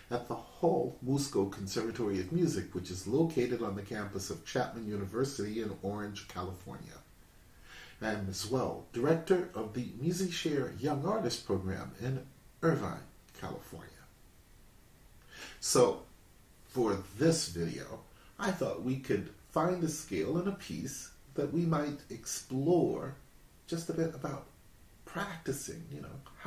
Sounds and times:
Speech: 0.0 - 7.1, 8.0 - 14.1, 15.6 - 16.1, 16.7 - 26.4.

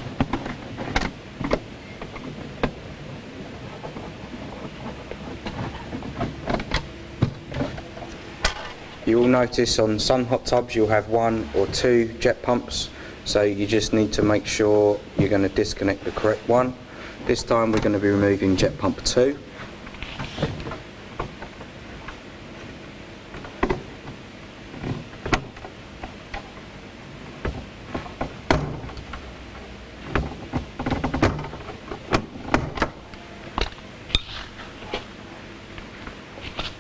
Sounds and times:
Speech: 9.0 - 19.5.

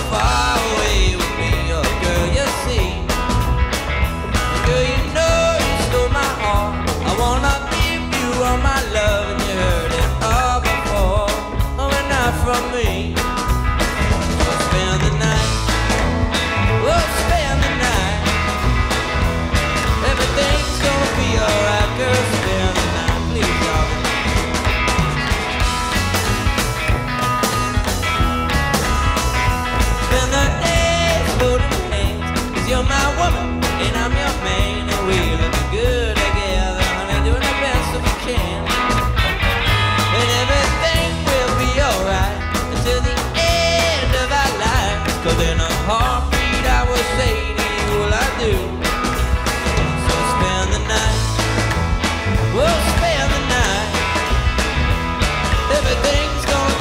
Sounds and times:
Music: 0.0 - 56.8.

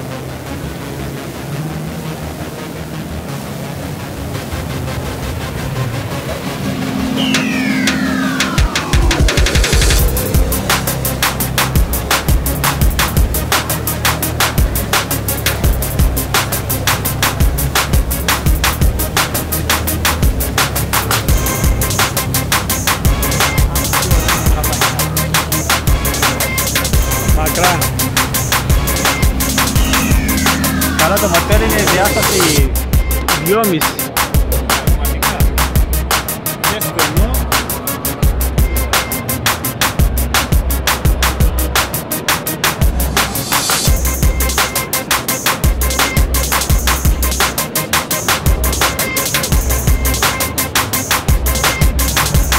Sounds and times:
Music: 0.0 - 52.5
Speech: 27.3 - 27.9, 31.0 - 35.6, 36.6 - 37.6.

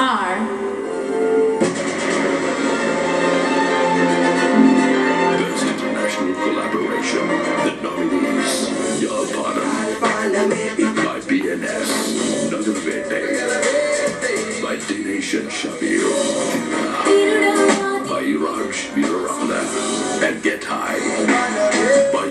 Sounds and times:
Speech: 0.0 - 0.5, 5.4 - 9.9, 10.9 - 13.4, 14.6 - 16.3, 17.8 - 21.2
Background music: 0.0 - 22.3.

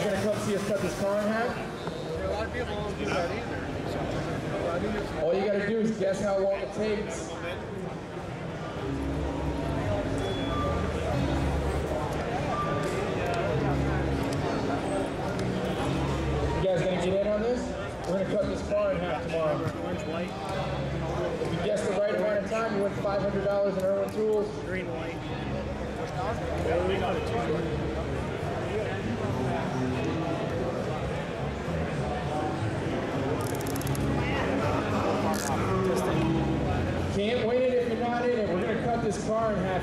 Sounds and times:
Music: 8.1 - 39.8.

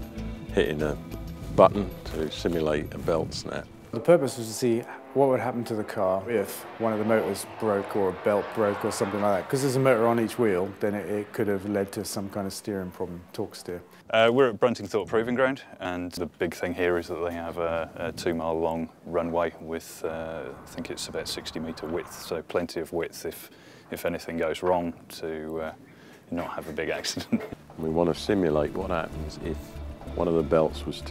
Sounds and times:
Speech: 0.5 - 1.0, 1.6 - 31.1.

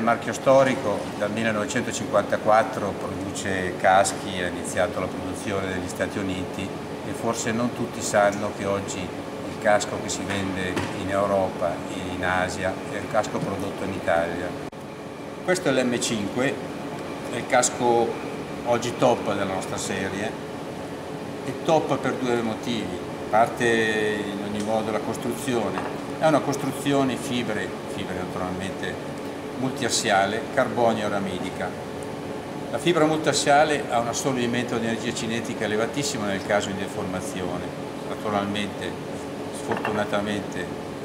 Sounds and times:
Speech: 0.0 - 14.6, 15.5 - 16.6, 17.3 - 20.4, 21.4 - 29.0, 29.6 - 31.8, 32.7 - 40.8.

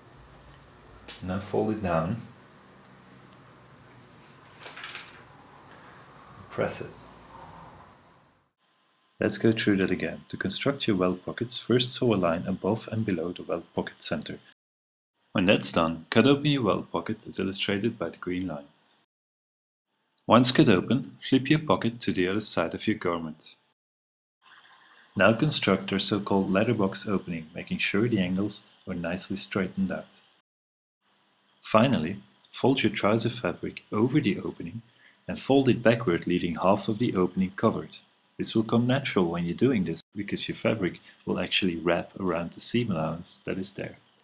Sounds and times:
Speech: 1.1 - 2.4, 6.5 - 7.0, 9.2 - 14.6, 15.4 - 19.0, 20.3 - 23.7, 25.2 - 30.3, 31.6 - 44.0.

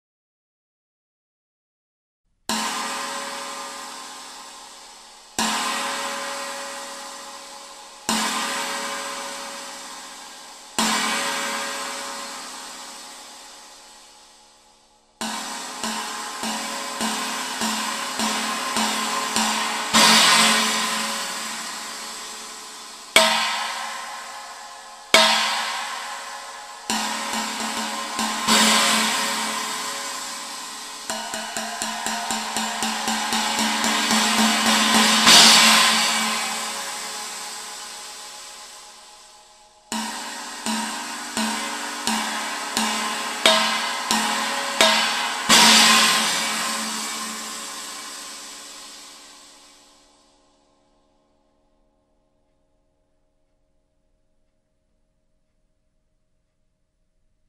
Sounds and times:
Music: 2.4 - 57.4.

